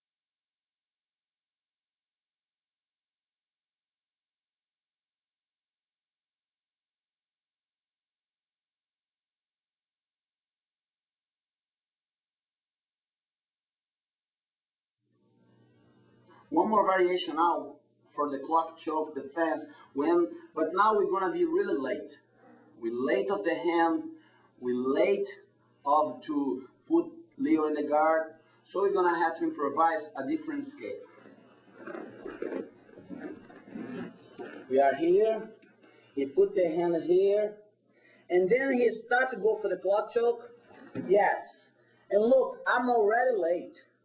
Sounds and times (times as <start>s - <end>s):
Speech: 16.5s - 22.2s, 22.8s - 31.1s, 34.7s - 35.6s, 36.2s - 37.6s, 38.3s - 43.9s.